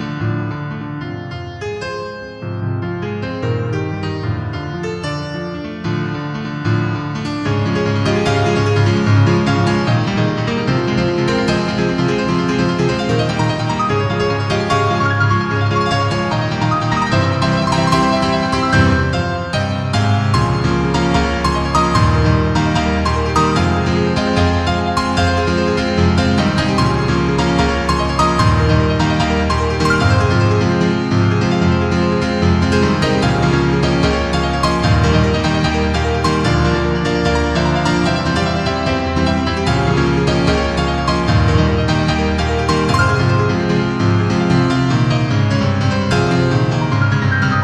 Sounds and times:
Music: 0.0 - 47.6.

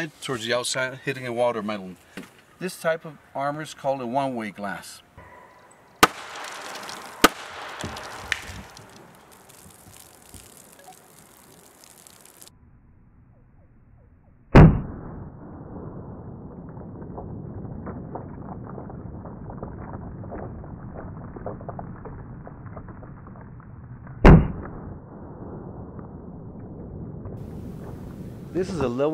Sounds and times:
Arrow: 5.2 - 9.0, 14.6 - 15.1, 24.2 - 24.8.

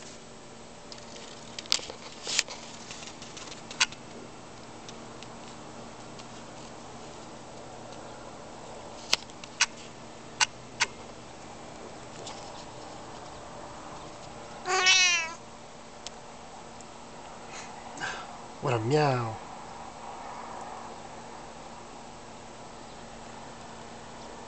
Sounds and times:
Meow: 14.6 - 15.4
Speech: 18.6 - 19.4.

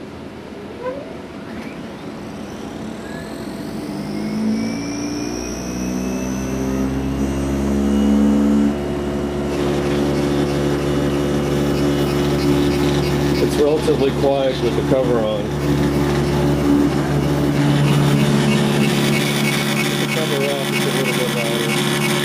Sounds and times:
Printer: 1.5 - 22.2
Speech: 13.4 - 15.5, 20.1 - 21.8.

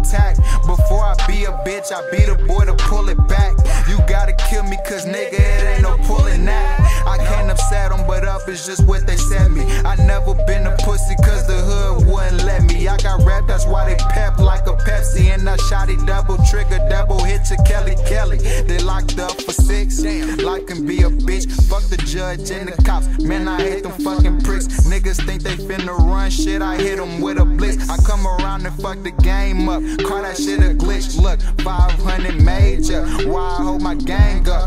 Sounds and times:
Music: 0.0 - 34.6
Rapping: 0.0 - 34.6.

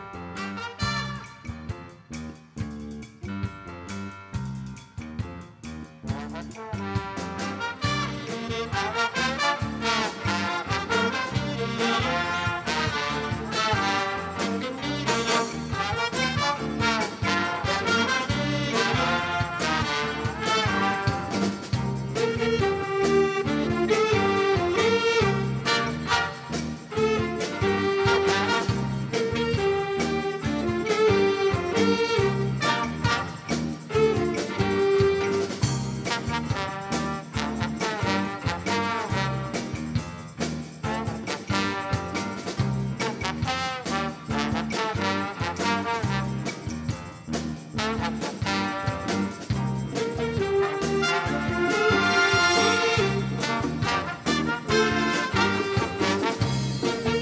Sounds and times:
Music: 0.0 - 57.2.

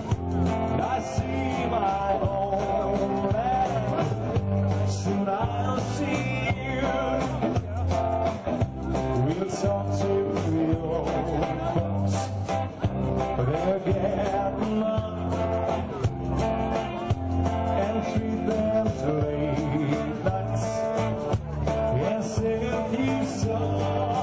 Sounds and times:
Music: 0.0 - 24.2
Male singing: 0.6 - 7.8, 9.1 - 12.3, 13.4 - 15.6, 17.7 - 21.2, 21.9 - 24.2
Speech: 0.8 - 24.2.

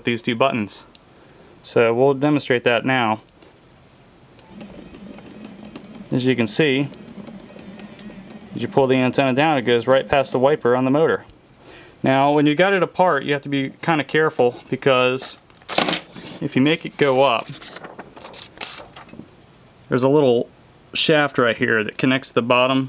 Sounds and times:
Speech: 0.0 - 0.9, 1.6 - 3.3, 6.1 - 6.9, 8.6 - 11.3, 12.0 - 15.4, 16.4 - 17.6, 19.9 - 22.8.

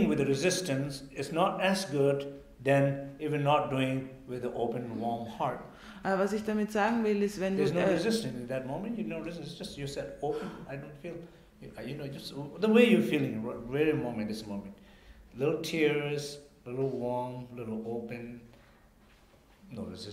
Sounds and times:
Speech: 0.0 - 14.8, 15.4 - 18.5, 19.7 - 20.1.

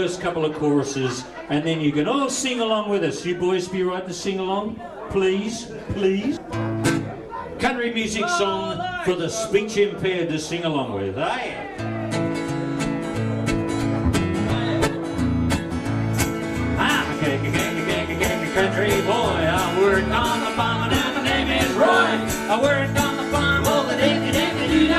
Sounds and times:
Country: 11.8 - 24.9
Musical instrument: 13.1 - 24.9.

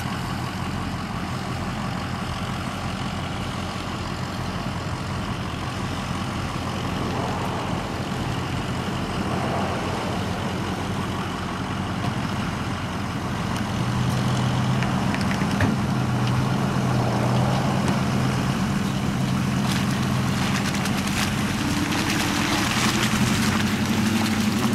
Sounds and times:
Car: 0.0 - 24.7
Outside, urban or manmade: 0.0 - 24.7.

